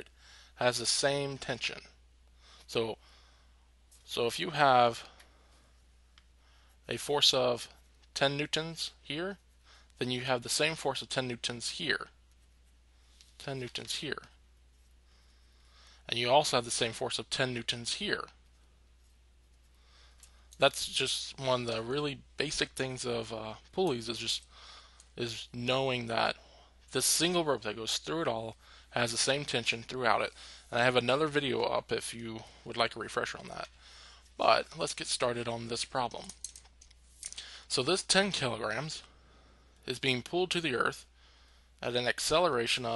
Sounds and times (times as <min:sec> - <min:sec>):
Speech: 0:00.0 - 0:02.0, 0:02.7 - 0:03.0, 0:04.1 - 0:05.2, 0:06.9 - 0:09.4, 0:10.0 - 0:12.2, 0:13.4 - 0:14.4, 0:16.1 - 0:18.4, 0:20.6 - 0:24.5, 0:25.2 - 0:33.7, 0:34.4 - 0:36.4, 0:37.7 - 0:39.1, 0:39.8 - 0:41.1, 0:41.8 - 0:42.9.